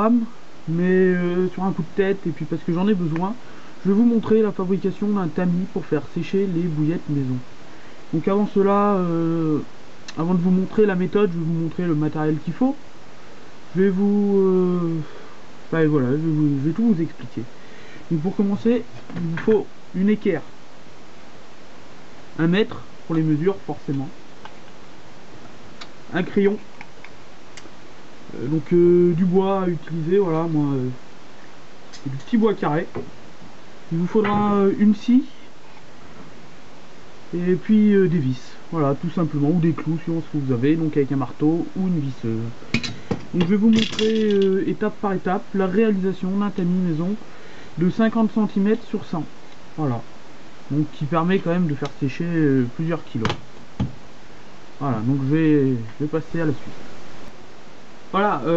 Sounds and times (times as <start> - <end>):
Speech: 0.0 - 7.5, 8.1 - 12.8, 13.7 - 15.1, 15.7 - 17.5, 18.1 - 20.5, 22.4 - 24.2, 26.1 - 26.7, 28.3 - 31.0, 32.0 - 33.0, 33.9 - 35.5, 37.3 - 42.6, 43.3 - 47.2, 47.8 - 50.1, 50.7 - 53.4, 54.8 - 56.7, 58.1 - 58.5.